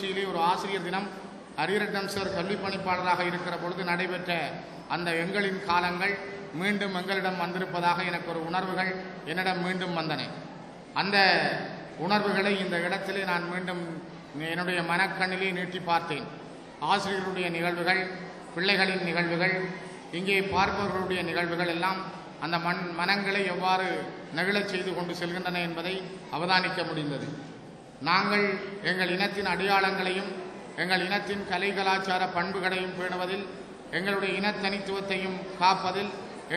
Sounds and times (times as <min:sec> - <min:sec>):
Male speech, man speaking: 0:00.0 - 0:10.4, 0:11.0 - 0:27.4, 0:28.0 - 0:36.5
Narration, monologue: 0:00.0 - 0:36.5.